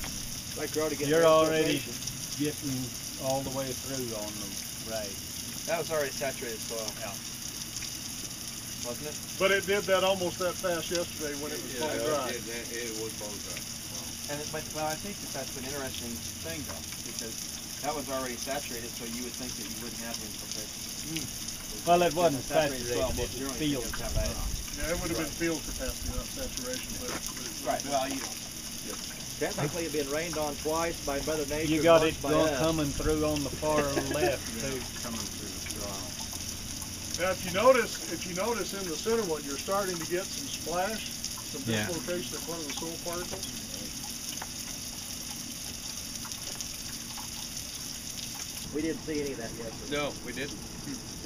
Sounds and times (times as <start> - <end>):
Speech: 0.6 - 7.2, 8.8 - 36.1, 37.2 - 43.9, 48.7 - 51.2.